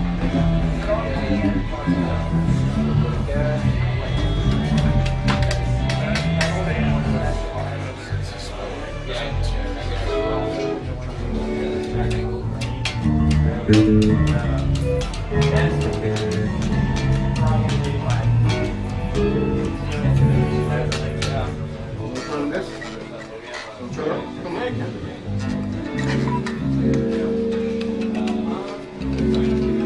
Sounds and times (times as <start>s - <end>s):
Electric guitar: 0.0s - 7.5s, 10.1s - 23.1s, 24.2s - 29.8s
Speech: 0.1s - 29.8s
Strum: 11.3s - 23.6s, 25.2s - 29.8s.